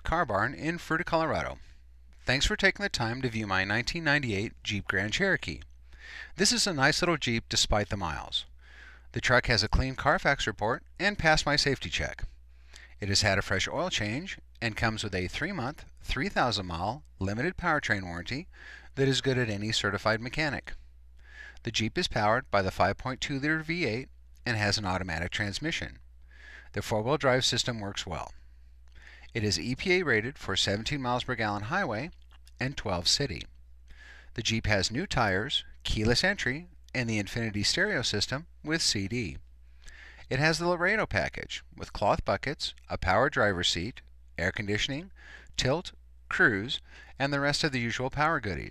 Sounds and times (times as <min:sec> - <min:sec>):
Speech: 0:00.0 - 0:01.6, 0:02.3 - 0:05.7, 0:06.4 - 0:08.5, 0:09.1 - 0:12.4, 0:13.0 - 0:20.8, 0:21.6 - 0:26.0, 0:26.7 - 0:28.4, 0:29.3 - 0:33.5, 0:34.4 - 0:39.4, 0:40.3 - 0:48.7.